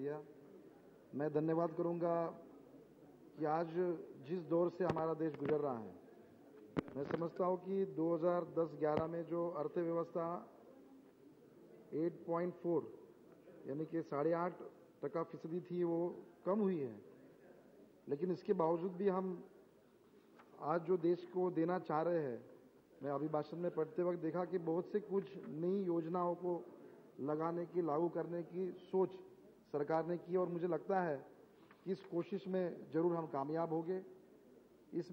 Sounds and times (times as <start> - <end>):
Male speech, man speaking: 0.0 - 0.4, 1.1 - 2.5, 3.3 - 6.0, 6.8 - 10.6, 11.9 - 17.2, 18.0 - 19.5, 20.5 - 34.2, 34.9 - 35.1
Narration, monologue: 0.0 - 35.1.